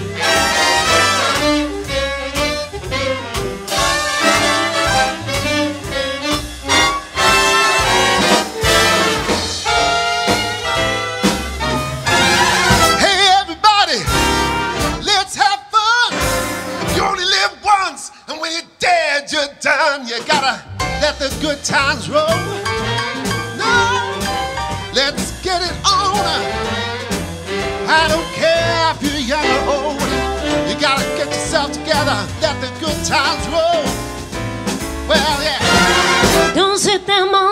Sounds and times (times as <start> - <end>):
Swing music: 0.0 - 37.5.